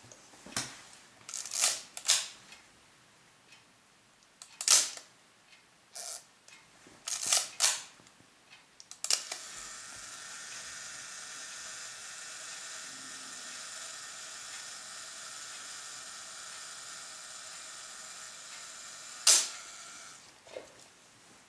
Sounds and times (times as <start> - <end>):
Single-lens reflex camera: 9.1 - 12.9, 13.6 - 20.2.